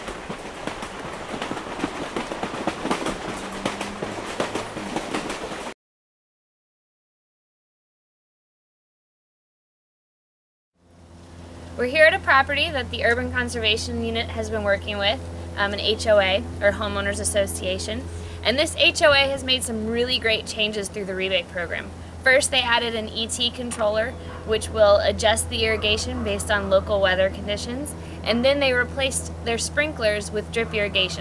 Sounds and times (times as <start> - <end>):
Speech: 11.8 - 31.2.